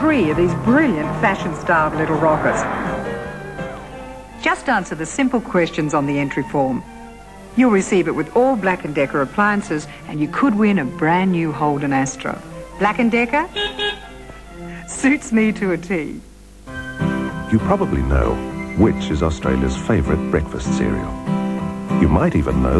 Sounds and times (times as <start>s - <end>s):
Speech: 0.0s - 2.8s, 4.4s - 6.8s, 7.6s - 13.5s, 14.9s - 16.2s, 17.5s - 21.2s, 22.0s - 22.7s
Music: 0.0s - 22.7s.